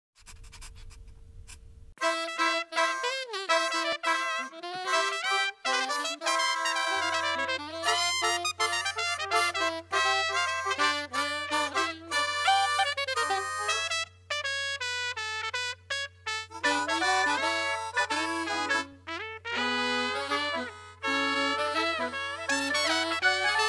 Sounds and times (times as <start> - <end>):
Music: 2.0 - 23.6.